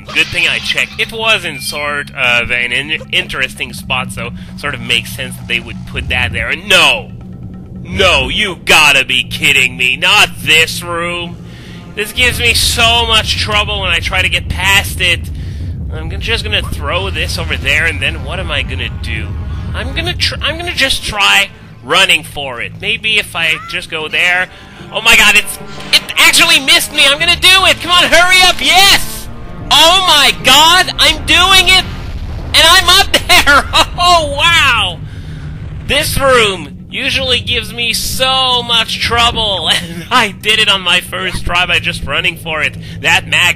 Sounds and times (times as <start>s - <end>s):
Speech: 0.0s - 7.1s, 7.9s - 11.3s, 12.0s - 15.3s, 15.9s - 31.9s, 32.6s - 35.0s, 35.9s - 43.5s.